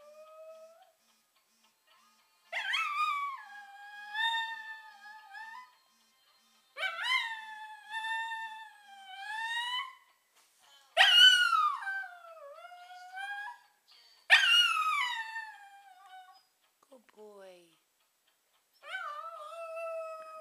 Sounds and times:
Whimper (dog): 2.6s - 5.8s, 6.8s - 10.1s, 14.3s - 16.5s, 18.8s - 20.4s
Yip: 11.0s - 12.0s, 14.3s - 15.4s.

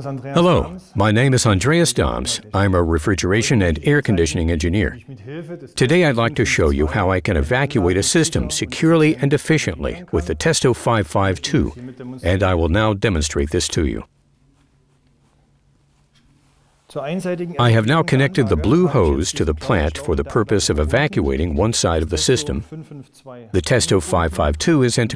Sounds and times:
Speech synthesizer: 0.2s - 5.1s, 5.8s - 14.1s, 17.0s - 23.0s, 23.6s - 25.1s.

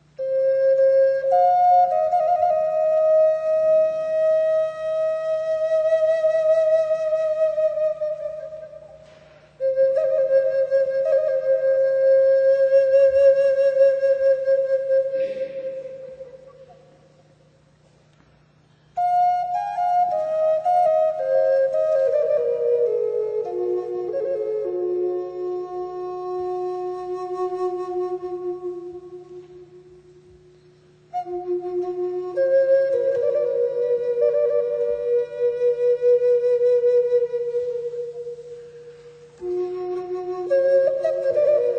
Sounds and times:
Flute: 0.0s - 17.8s, 18.7s - 41.7s.

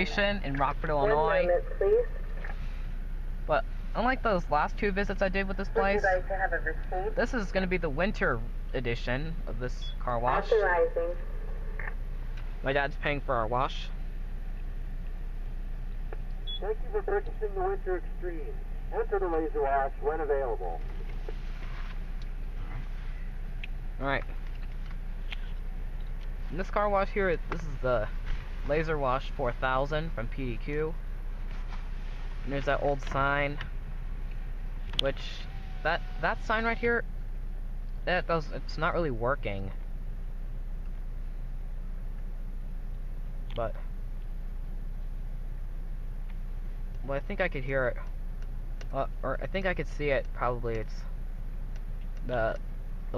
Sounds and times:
Speech: 0.0s - 2.1s, 3.5s - 11.2s, 12.6s - 14.0s, 16.6s - 20.9s, 24.0s - 24.3s, 26.5s - 28.1s, 28.7s - 31.0s, 32.5s - 33.7s, 35.0s - 37.0s, 38.0s - 39.8s, 43.5s - 43.9s, 47.0s - 48.1s, 48.9s - 51.1s, 52.2s - 53.1s.

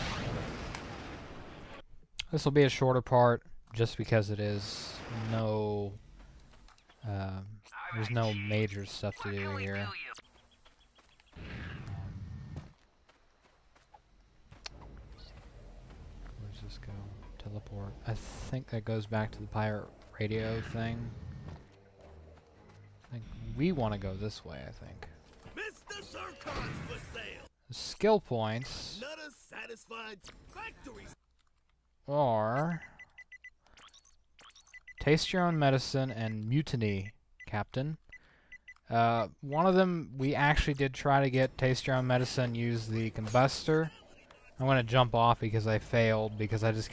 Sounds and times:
Speech: 2.2s - 6.0s, 7.0s - 10.2s, 16.4s - 21.1s, 23.1s - 31.2s, 32.1s - 32.8s, 35.0s - 38.0s, 38.9s - 46.9s.

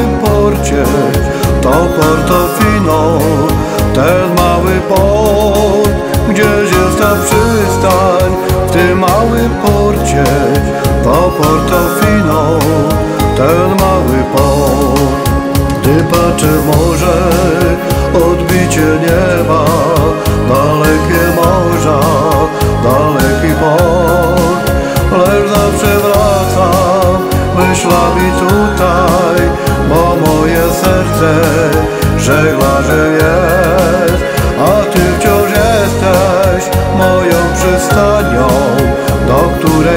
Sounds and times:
Christian music: 0.0s - 39.9s.

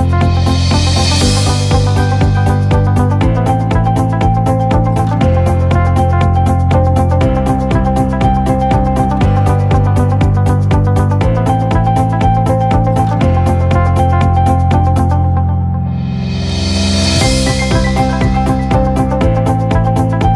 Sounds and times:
Music: 0.0s - 20.3s.

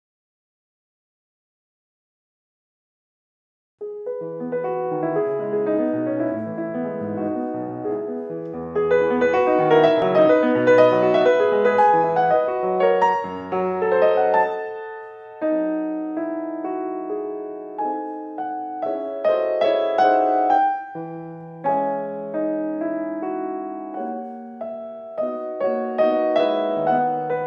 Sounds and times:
Classical music: 3.8s - 27.4s
Piano: 3.8s - 27.4s.

